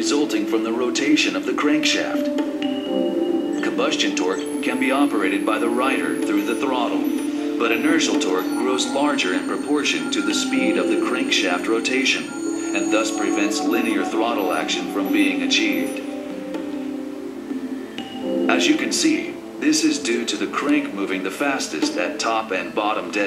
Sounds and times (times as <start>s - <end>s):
Speech: 0.0s - 2.3s, 3.6s - 16.1s, 18.5s - 23.2s.